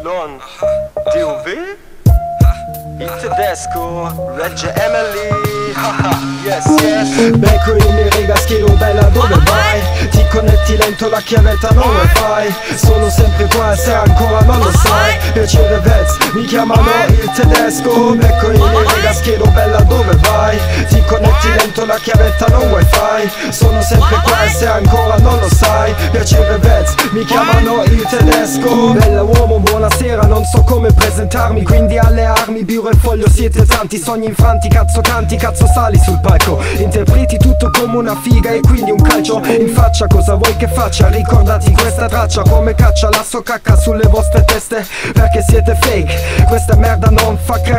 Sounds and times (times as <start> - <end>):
Music: 0.0 - 47.7.